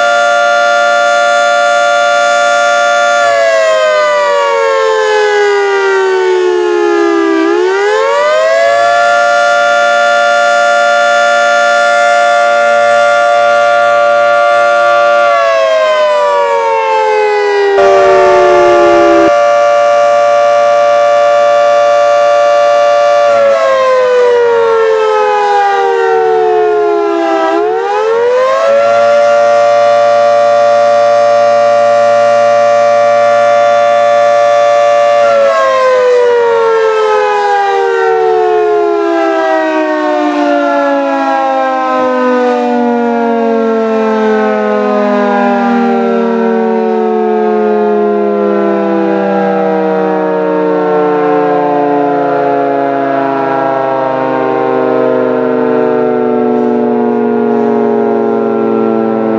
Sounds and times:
Civil defense siren: 0:00.0 - 0:59.3.

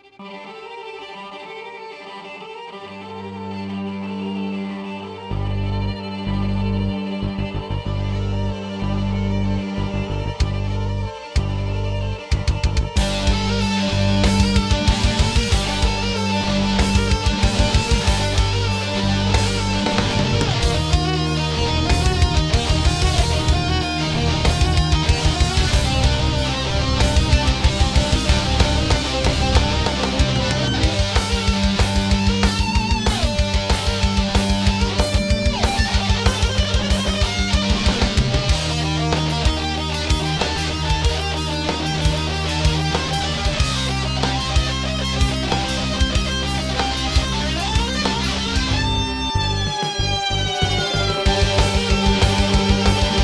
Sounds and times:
Violin, fiddle: 0:00.0 - 0:53.2.

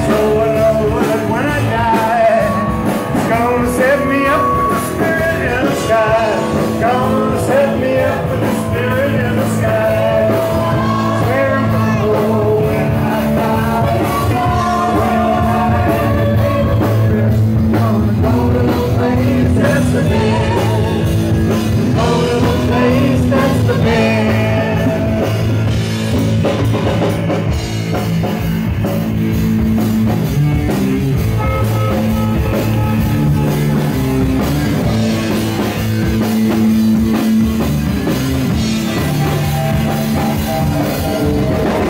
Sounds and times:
Musical instrument: 0:00.0 - 0:41.8.

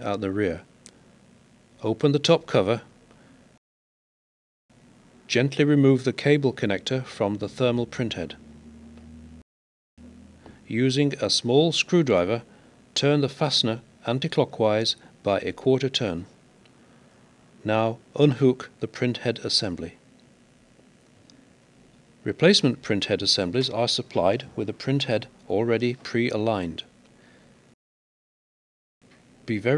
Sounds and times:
Speech: 0:00.0 - 0:00.7, 0:01.8 - 0:02.9, 0:05.3 - 0:08.4, 0:10.7 - 0:16.4, 0:17.6 - 0:20.0, 0:22.2 - 0:26.9, 0:29.5 - 0:29.7.

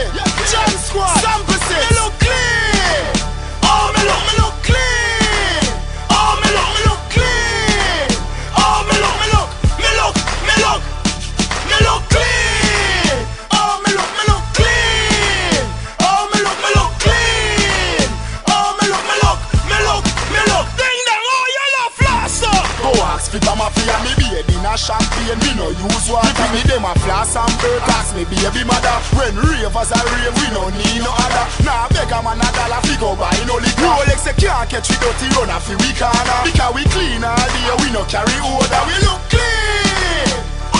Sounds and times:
Music: 0:00.0 - 0:40.7.

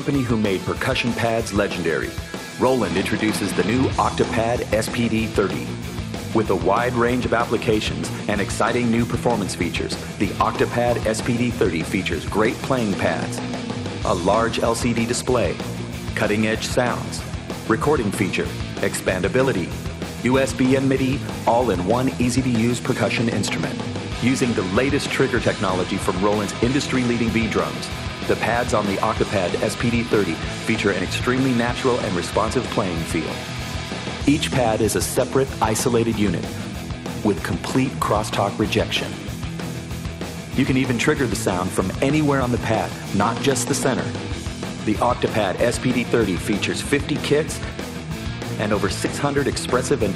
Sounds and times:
Speech: 0:00.0 - 0:33.5, 0:34.2 - 0:39.3, 0:40.6 - 0:44.2, 0:44.8 - 0:47.7, 0:48.6 - 0:50.1
Music: 0:00.0 - 0:50.1.

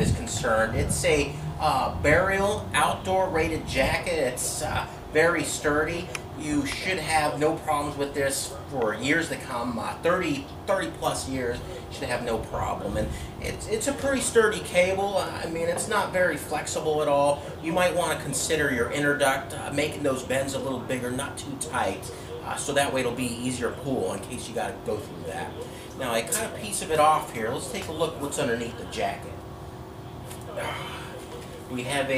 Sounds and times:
Speech: 0:00.0 - 0:29.4, 0:31.7 - 0:32.1.

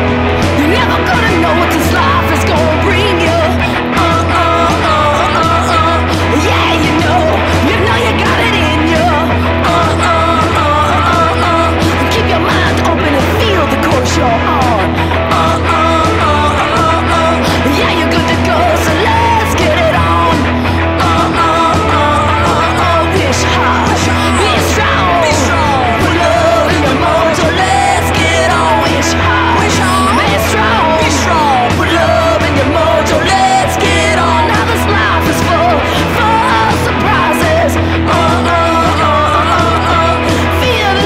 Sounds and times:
Music: 0:00.0 - 0:41.0.

